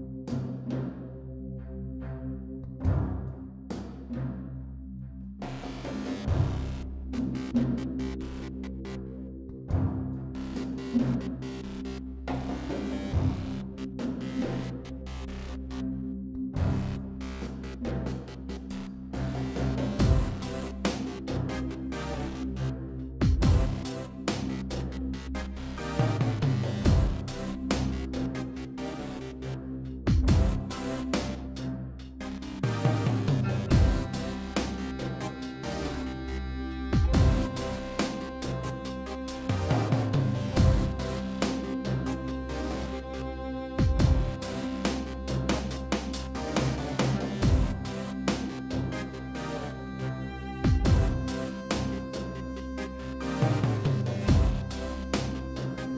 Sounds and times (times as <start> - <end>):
Music: 0.0 - 55.9.